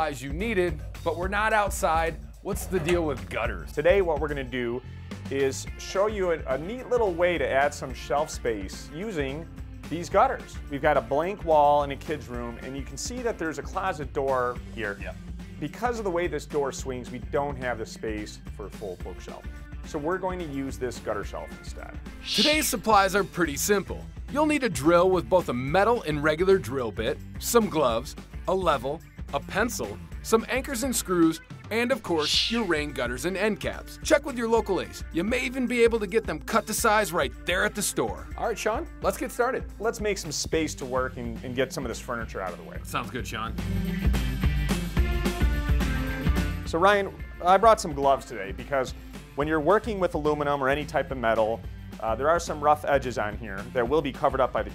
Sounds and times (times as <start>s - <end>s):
Speech: 0.0s - 43.6s, 46.7s - 54.7s
Music: 0.0s - 54.7s.